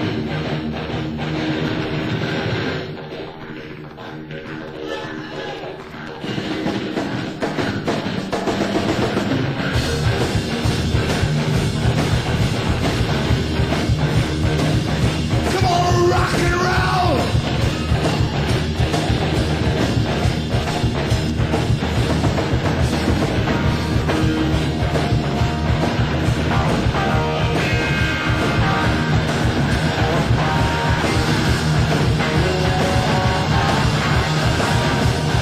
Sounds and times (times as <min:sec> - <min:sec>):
Music: 0:00.0 - 0:35.4.